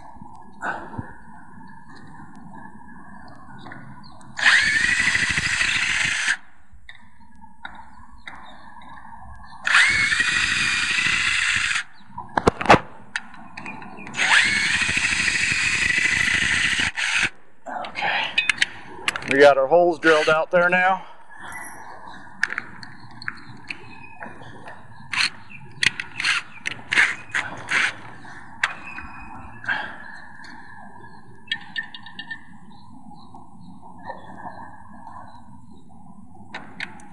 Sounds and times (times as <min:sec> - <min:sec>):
Speech: 0:19.3 - 0:21.0.